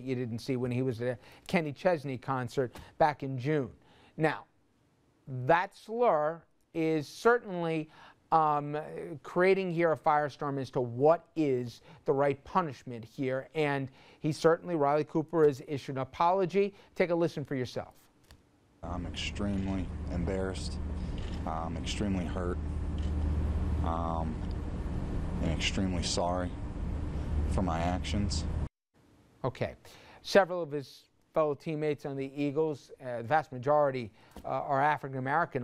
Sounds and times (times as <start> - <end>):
Speech: 0.0 - 4.5, 5.3 - 18.0, 18.8 - 20.8, 21.4 - 22.6, 23.9 - 24.4, 25.4 - 26.6, 27.5 - 28.5, 29.4 - 35.6.